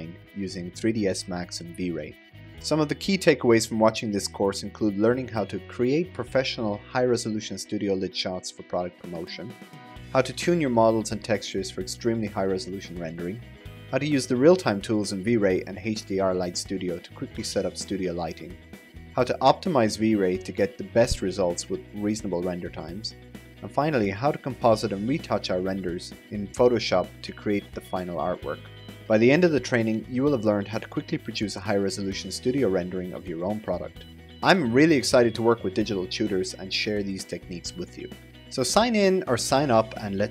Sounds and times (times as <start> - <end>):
Speech: 0.0 - 18.6, 19.2 - 40.3
Music: 0.0 - 40.3.